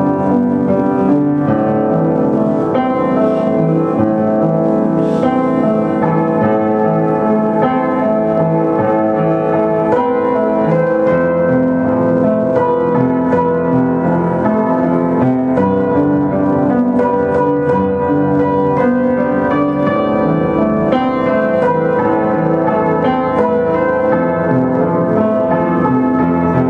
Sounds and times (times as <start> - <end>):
Music: 0.0 - 26.6.